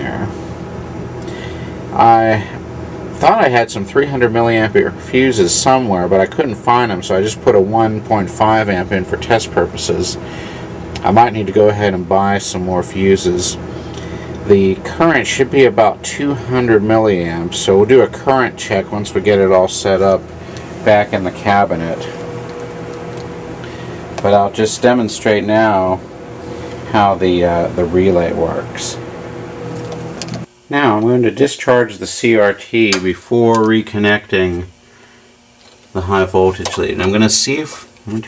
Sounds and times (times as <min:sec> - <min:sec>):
Speech: 0:00.0 - 0:00.4, 0:02.0 - 0:02.6, 0:03.2 - 0:10.3, 0:11.0 - 0:13.6, 0:14.5 - 0:22.2, 0:24.2 - 0:26.0, 0:26.9 - 0:29.0, 0:30.7 - 0:34.8, 0:35.9 - 0:38.2.